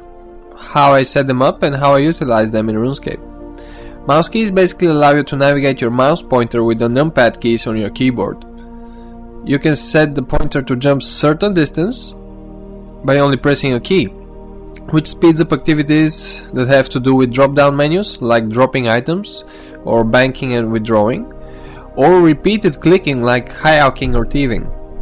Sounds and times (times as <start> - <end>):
Music: 0.0 - 25.0
Speech: 0.6 - 3.2, 4.1 - 8.4, 9.5 - 12.2, 13.0 - 14.1, 14.8 - 21.3, 22.0 - 24.8.